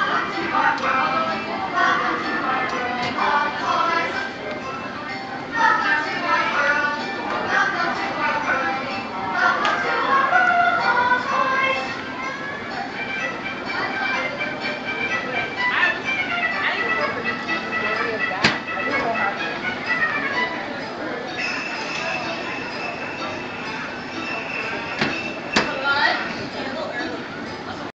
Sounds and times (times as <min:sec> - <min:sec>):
Music: 0:00.0 - 0:27.9
Speech: 0:13.6 - 0:27.9.